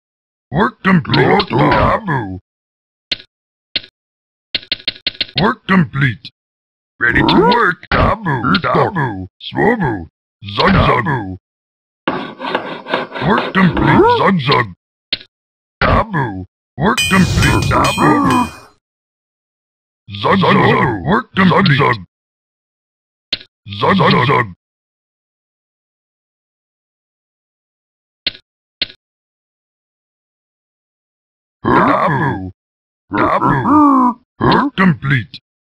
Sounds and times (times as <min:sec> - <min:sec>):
Speech: 0:00.5 - 0:02.4, 0:05.4 - 0:06.4, 0:07.0 - 0:11.4, 0:13.2 - 0:14.8, 0:15.8 - 0:18.7, 0:20.1 - 0:22.1, 0:23.7 - 0:24.6, 0:31.6 - 0:35.4.